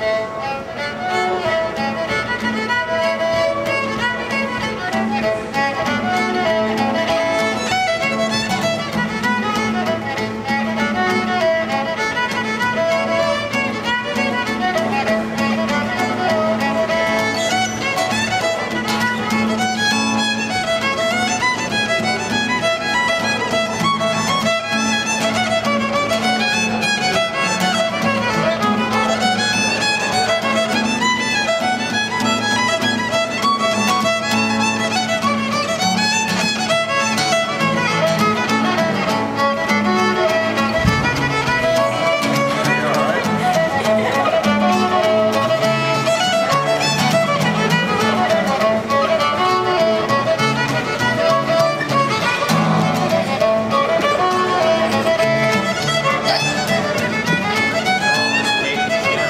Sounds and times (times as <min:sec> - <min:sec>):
Guitar: 0:00.0 - 0:59.3.